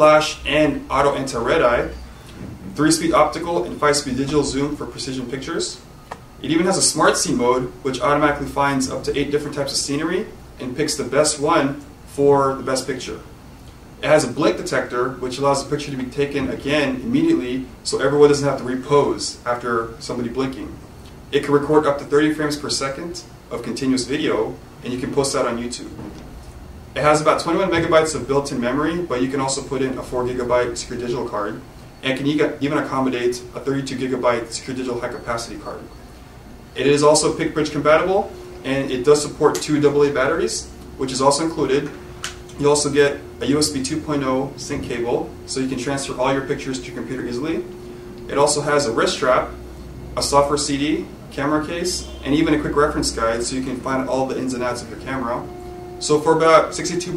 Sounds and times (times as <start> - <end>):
Speech: 0.0 - 2.0, 2.7 - 5.8, 6.4 - 13.3, 14.0 - 26.0, 27.0 - 35.9, 36.8 - 47.7, 48.3 - 49.6, 50.2 - 57.1.